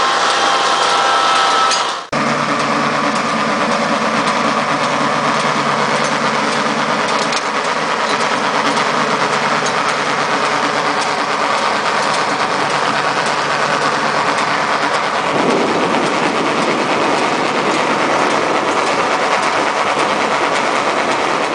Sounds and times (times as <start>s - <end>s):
Outside, rural or natural: 0.0s - 21.5s
Vehicle: 0.0s - 21.5s.